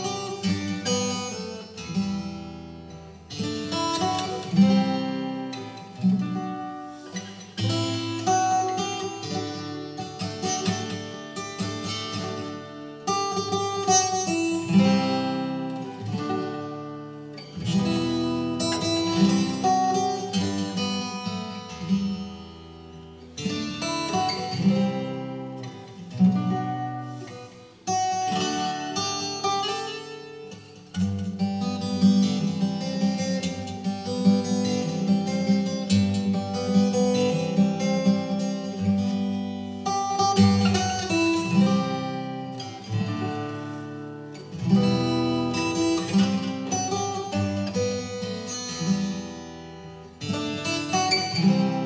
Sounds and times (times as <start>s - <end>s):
Acoustic guitar: 0.0s - 51.8s.